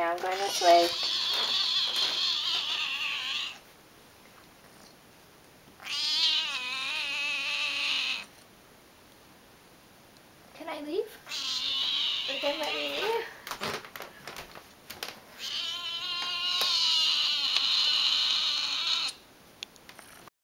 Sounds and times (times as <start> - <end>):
Speech: 0.0 - 1.0, 10.6 - 11.2, 12.3 - 13.4.